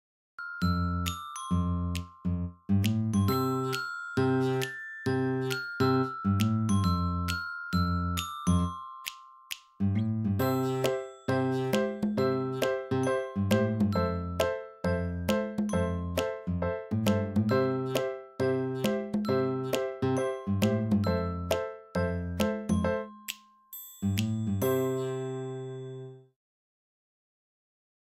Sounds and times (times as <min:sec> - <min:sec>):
Music: 0:00.4 - 0:26.4.